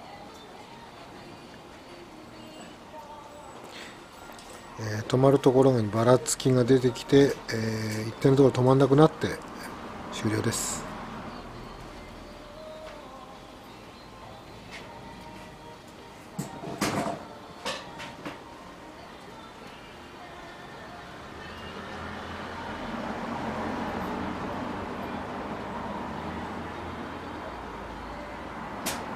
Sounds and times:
Music: 0:00.0 - 0:29.1
Speech: 0:04.8 - 0:09.4, 0:10.1 - 0:10.9.

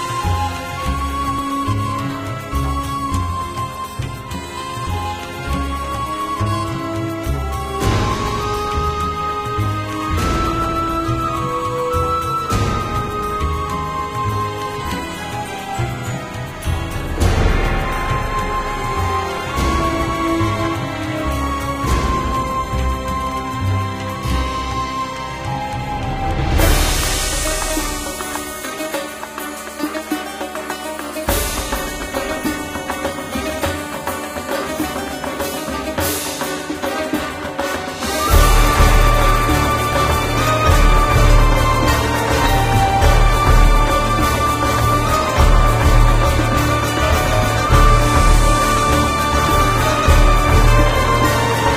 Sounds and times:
Soul music: 0:00.0 - 0:51.7.

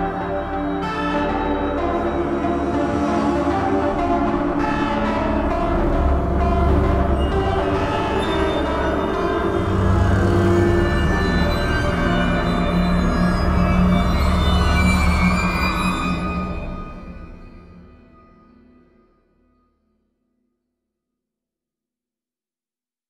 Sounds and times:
Soundtrack music: 0:00.0 - 0:18.2.

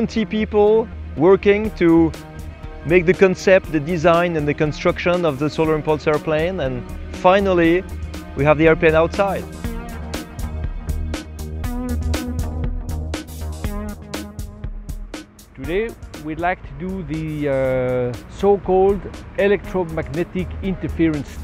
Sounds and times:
Speech: 0:00.0 - 0:02.1, 0:02.9 - 0:07.8, 0:08.4 - 0:09.5, 0:15.6 - 0:21.4
Music: 0:00.0 - 0:21.4.

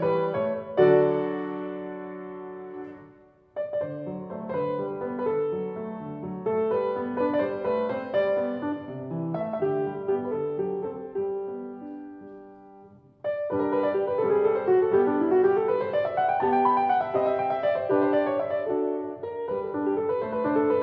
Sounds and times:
Music: 0:00.0 - 0:20.8.

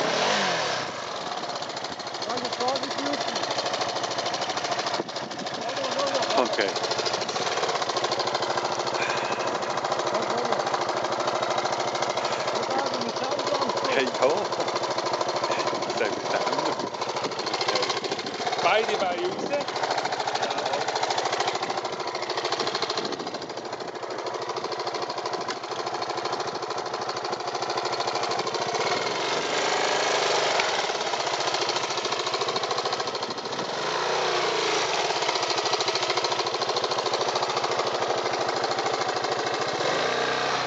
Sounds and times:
Vehicle: 0:00.0 - 0:40.6.

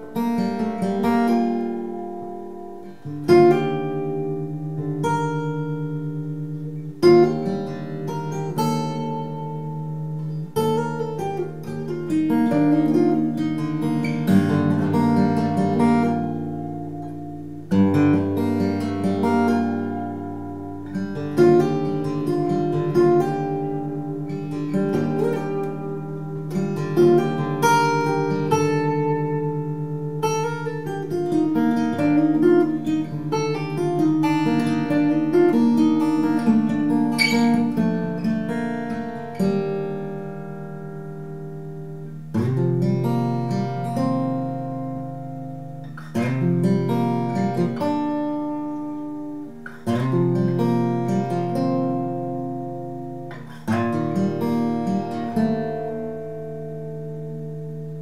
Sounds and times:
Acoustic guitar: 0:00.0 - 0:58.0.

